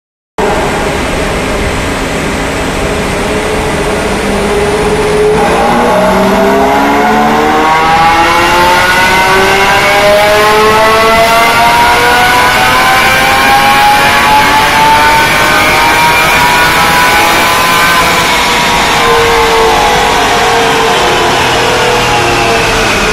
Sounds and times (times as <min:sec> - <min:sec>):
Race car, auto racing: 0:00.4 - 0:23.1.